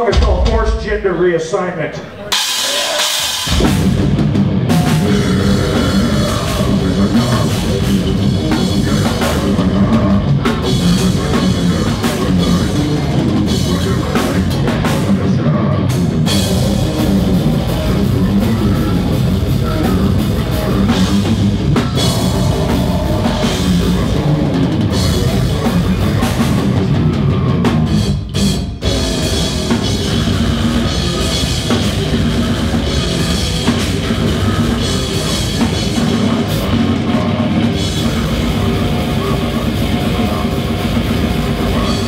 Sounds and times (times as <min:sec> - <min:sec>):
Music: 0:02.1 - 0:42.0.